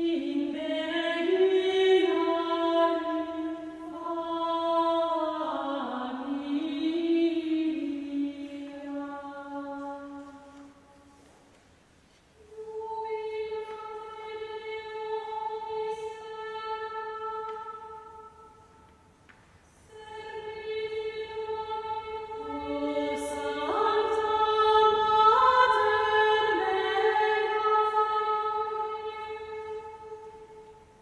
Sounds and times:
Music: 0:19.8 - 0:31.0.

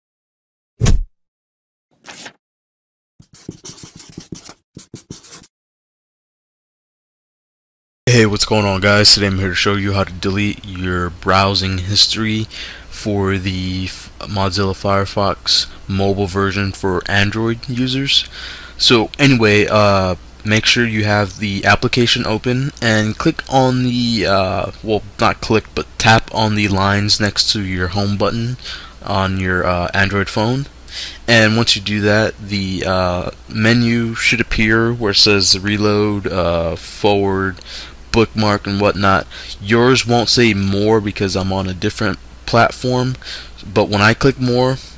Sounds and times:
Speech: 0:08.1 - 0:44.9.

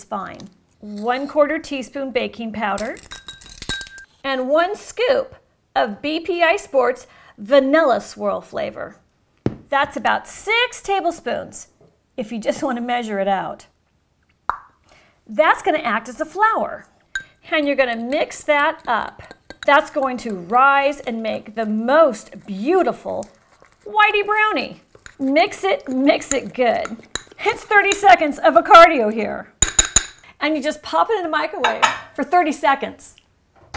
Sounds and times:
Speech: 0:09.7 - 0:13.7, 0:17.5 - 0:23.3, 0:23.9 - 0:29.5, 0:30.4 - 0:33.2.

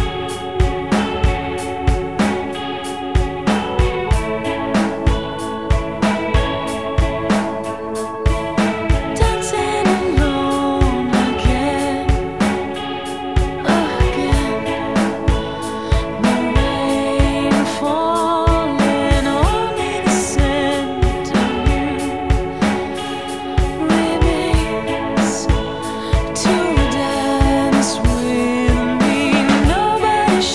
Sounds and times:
Music: 0:00.0 - 0:30.5.

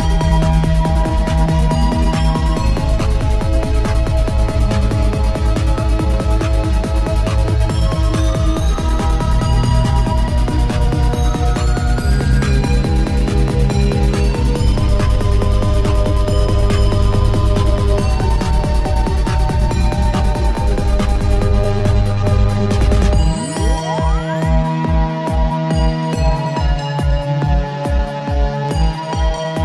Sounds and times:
Trance music: 0:00.0 - 0:29.6.

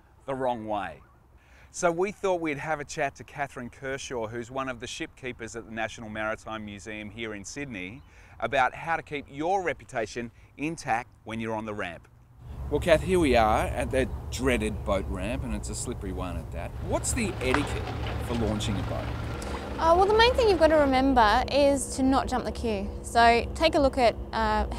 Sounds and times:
Speech: 0:00.3 - 0:01.0, 0:01.8 - 0:12.0, 0:12.8 - 0:19.1, 0:19.8 - 0:24.7.

